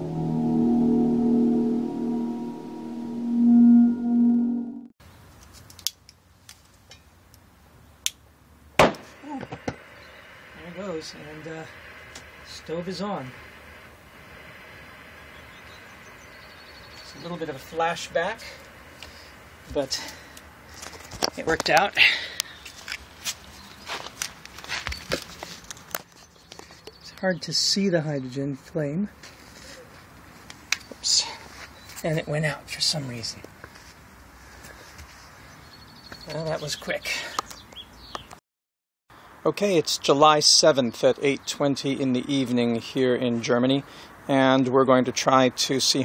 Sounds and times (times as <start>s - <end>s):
Speech: 10.6s - 11.8s, 12.4s - 13.4s, 17.1s - 18.6s, 19.7s - 20.2s, 21.3s - 22.0s, 27.0s - 29.2s, 31.0s - 33.5s, 36.2s - 37.3s, 39.4s - 46.0s.